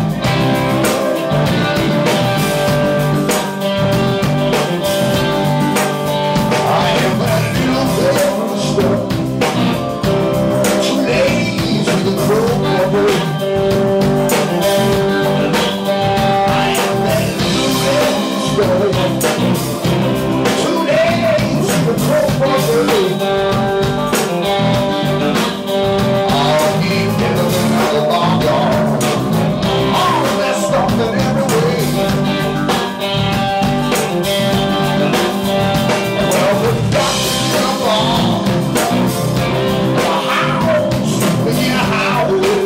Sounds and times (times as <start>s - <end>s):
Blues: 0.0s - 42.6s
Jazz: 0.0s - 42.6s.